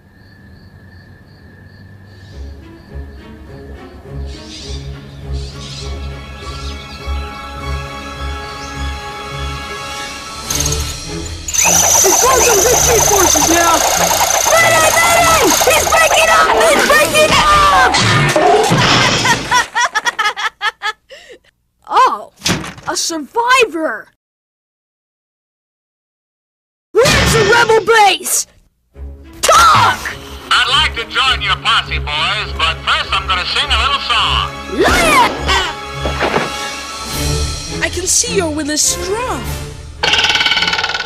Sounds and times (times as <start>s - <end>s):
Music: 1.4s - 18.0s, 29.0s - 40.0s
Speech: 21.9s - 24.1s, 29.5s - 35.3s, 37.8s - 39.4s.